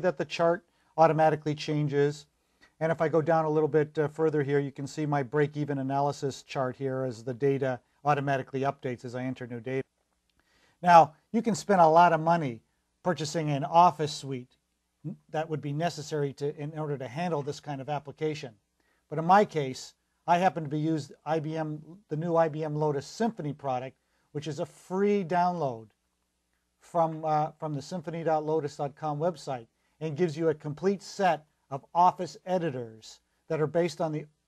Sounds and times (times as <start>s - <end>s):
Speech: 0.0s - 9.9s, 10.8s - 26.0s, 26.8s - 34.4s.